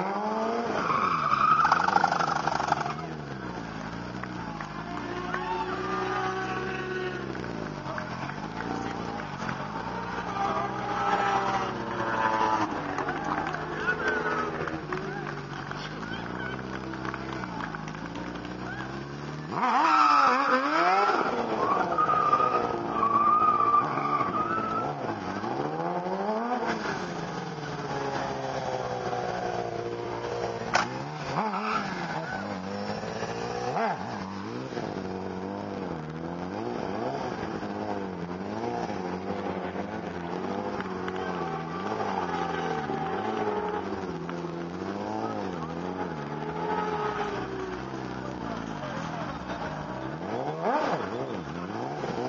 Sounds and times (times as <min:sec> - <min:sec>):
Motorcycle: 0:00.0 - 0:52.2
Outside, urban or manmade: 0:00.0 - 0:52.2
Race car, auto racing: 0:00.0 - 0:52.2.